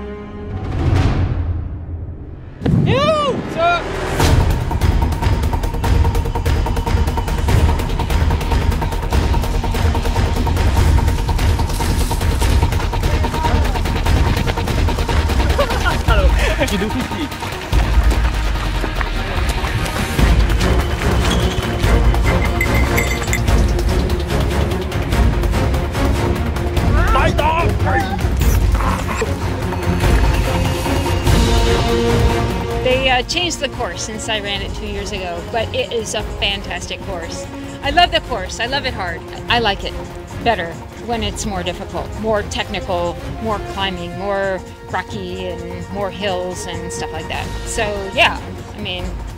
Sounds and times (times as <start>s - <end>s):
Music: 0.0s - 49.3s
Run: 12.4s - 25.0s.